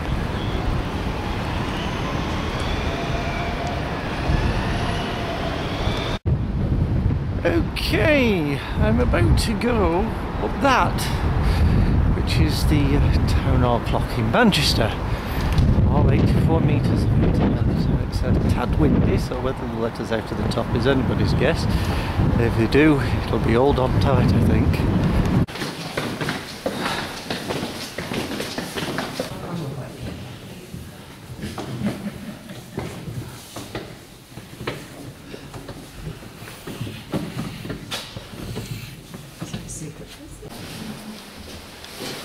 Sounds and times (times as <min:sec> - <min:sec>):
Speech: 0:07.4 - 0:11.2, 0:12.2 - 0:15.0, 0:15.9 - 0:21.7, 0:22.4 - 0:24.8.